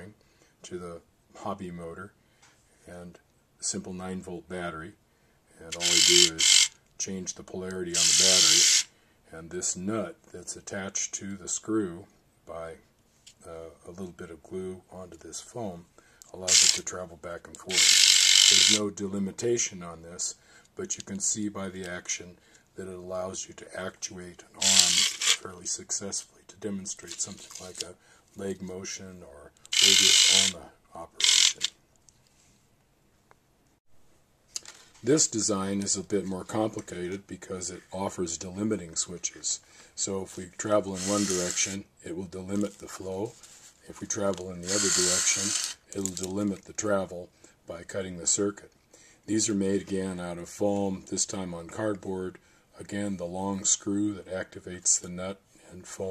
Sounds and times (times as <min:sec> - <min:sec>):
Speech: 0:00.0 - 0:02.2, 0:02.8 - 0:17.9, 0:18.5 - 0:31.8, 0:35.0 - 0:56.1
Inside, small room: 0:00.0 - 0:56.1.